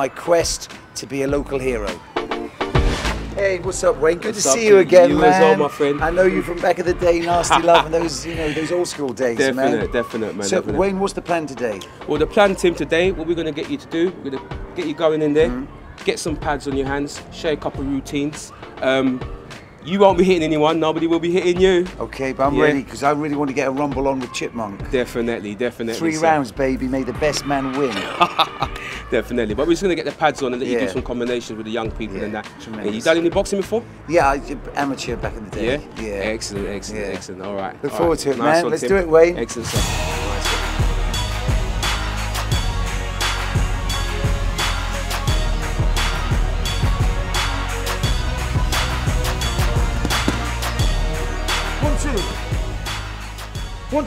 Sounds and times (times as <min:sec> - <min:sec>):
Music: 0:00.0 - 0:54.0
Speech: 0:03.4 - 0:19.2, 0:19.9 - 0:28.0, 0:29.1 - 0:39.8.